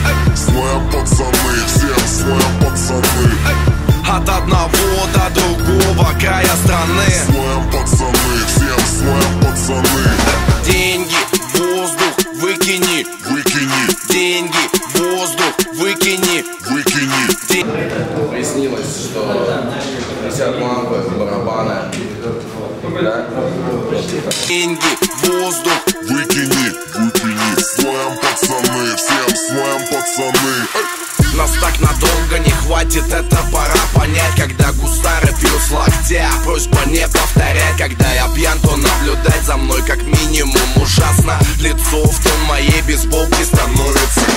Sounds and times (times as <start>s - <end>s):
Music: 0.0s - 17.6s, 24.3s - 44.3s
Speech: 17.6s - 24.6s.